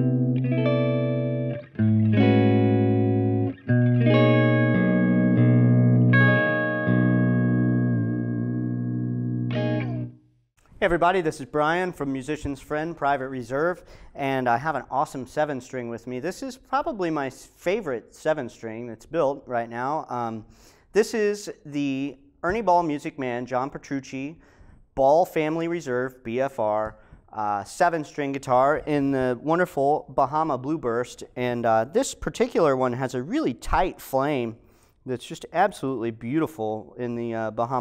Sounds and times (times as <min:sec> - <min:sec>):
Bass guitar: 0:00.0 - 0:10.2
Speech: 0:10.8 - 0:24.4, 0:25.0 - 0:37.8.